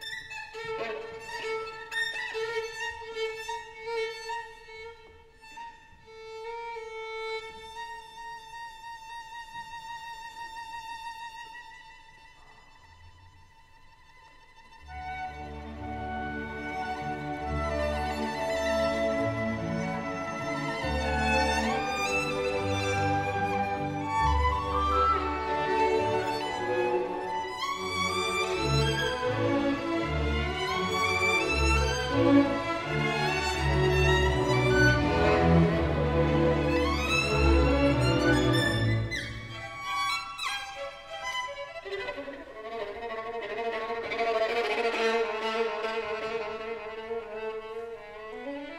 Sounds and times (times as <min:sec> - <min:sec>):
Violin, fiddle: 0:00.0 - 0:48.7.